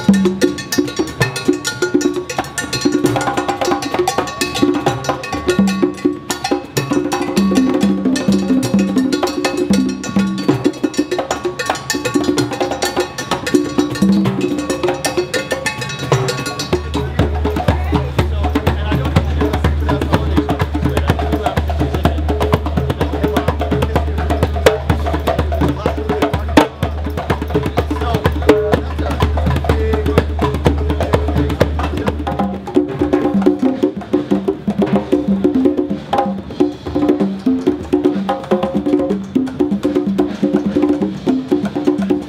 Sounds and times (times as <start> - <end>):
Wood block: 0.0 - 42.2
Speech: 16.3 - 32.3.